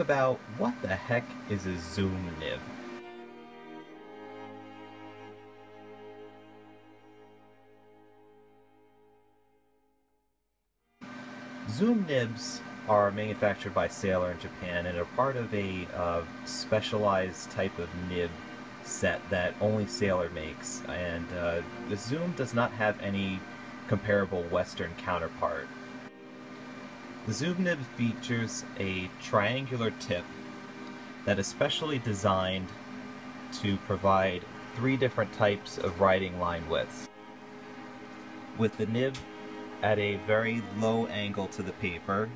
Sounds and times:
Speech: 0:00.0 - 0:02.7, 0:11.6 - 0:25.7, 0:27.3 - 0:30.3, 0:31.2 - 0:32.8, 0:33.5 - 0:37.1, 0:38.6 - 0:42.3.

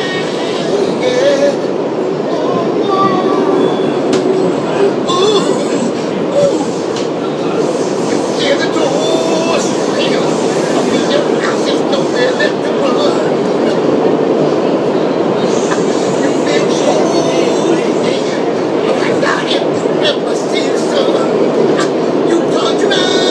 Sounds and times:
Male singing: 0:00.0 - 0:01.7, 0:08.4 - 0:13.5, 0:16.2 - 0:21.4, 0:22.3 - 0:23.3
Train: 0:00.0 - 0:23.3.

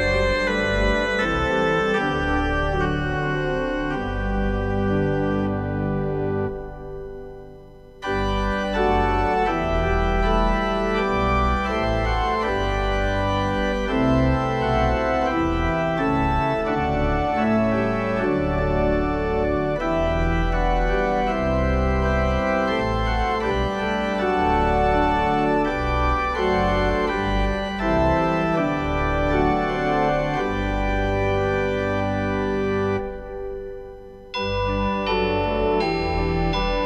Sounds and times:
Keyboard (musical): 0:00.0 - 0:36.8.

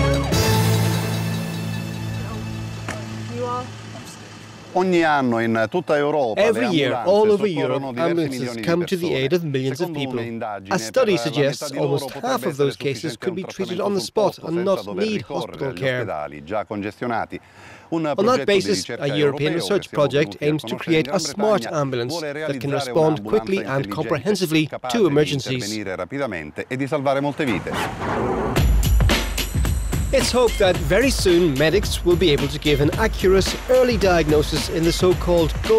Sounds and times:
Speech: 0:04.8 - 0:27.9, 0:30.2 - 0:35.7.

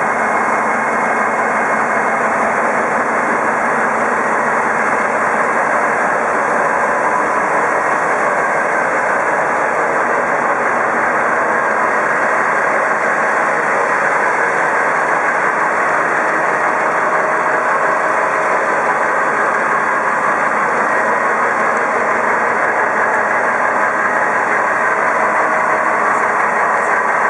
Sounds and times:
Vehicle: 0:00.0 - 0:27.2.

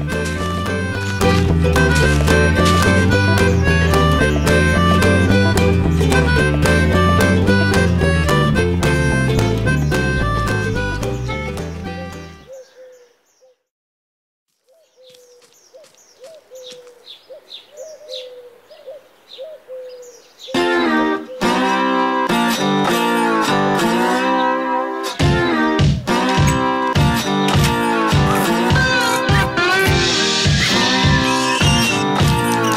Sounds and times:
Music: 0:00.0 - 0:12.5, 0:20.6 - 0:32.7
Outside, rural or natural: 0:00.0 - 0:13.7, 0:14.5 - 0:32.7
Chirp, tweet: 0:12.4 - 0:13.6, 0:14.7 - 0:20.6.

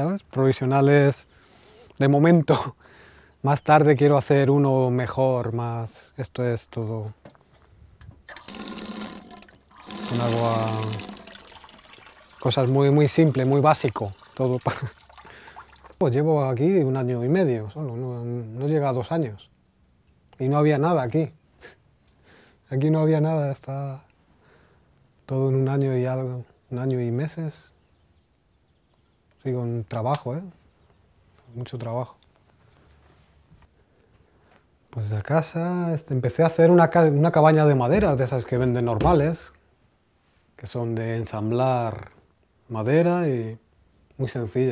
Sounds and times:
Speech: 0:00.0 - 0:01.3, 0:02.0 - 0:02.8, 0:03.4 - 0:07.2, 0:10.1 - 0:11.1, 0:12.4 - 0:14.9, 0:16.0 - 0:19.5, 0:20.4 - 0:21.4, 0:22.7 - 0:24.1, 0:25.3 - 0:27.8, 0:29.4 - 0:30.6, 0:31.5 - 0:32.2, 0:34.9 - 0:39.6, 0:40.6 - 0:43.6, 0:44.2 - 0:44.7
Fill (with liquid): 0:08.3 - 0:16.0
Sink (filling or washing): 0:08.3 - 0:16.0.

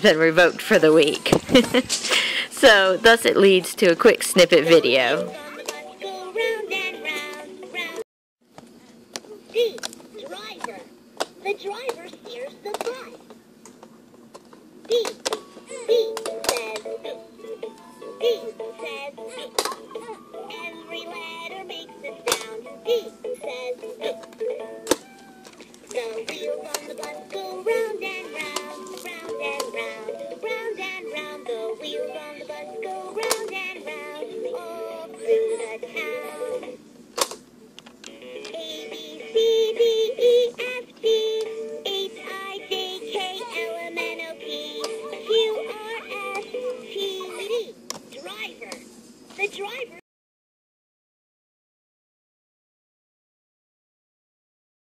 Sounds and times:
Music: 0:04.2 - 0:08.0, 0:15.3 - 0:36.8, 0:38.0 - 0:47.3.

